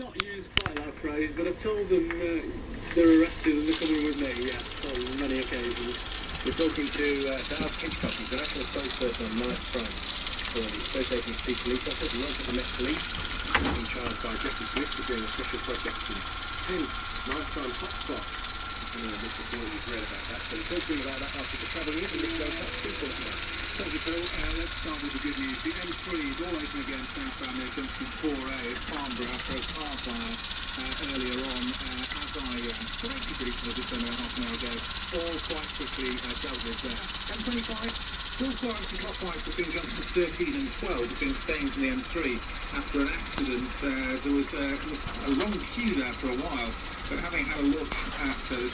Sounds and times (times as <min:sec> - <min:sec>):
Speech: 0:00.0 - 0:48.7.